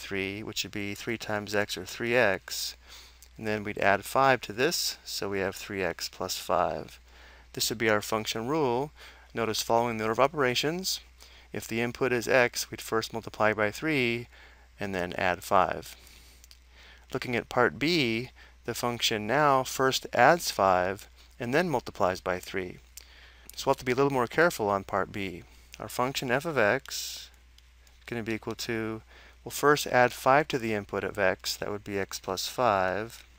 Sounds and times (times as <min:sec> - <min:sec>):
Speech: 0:00.0 - 0:02.8, 0:03.4 - 0:07.0, 0:07.6 - 0:16.0, 0:17.1 - 0:22.8, 0:23.6 - 0:27.4, 0:28.1 - 0:33.3.